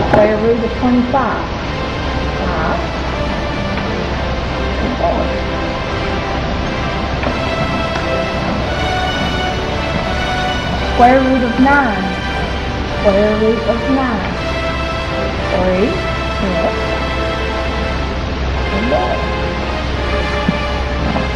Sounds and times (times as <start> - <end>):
Speech: 0.0 - 1.5, 2.4 - 2.9, 4.8 - 5.3, 11.0 - 12.2, 13.0 - 14.4, 15.5 - 16.8, 18.7 - 19.2
Music: 0.0 - 21.3.